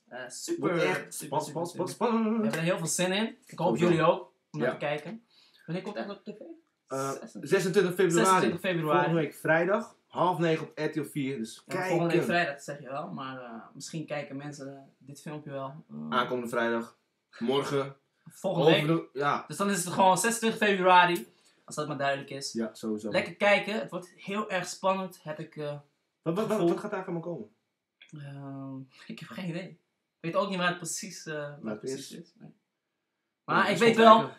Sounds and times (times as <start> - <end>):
Speech: 0.0 - 27.4, 28.2 - 29.7, 30.3 - 32.4, 33.5 - 34.3.